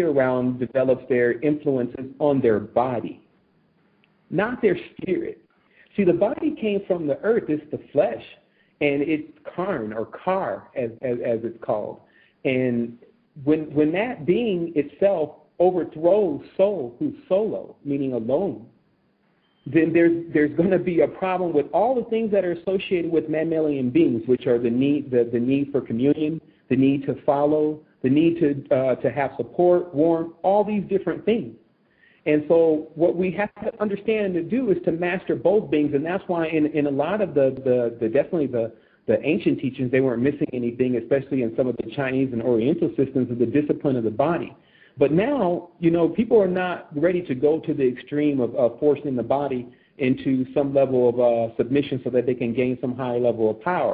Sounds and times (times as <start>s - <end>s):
Speech: 0.0s - 3.2s, 4.3s - 18.8s, 19.6s - 31.6s, 32.2s - 53.9s.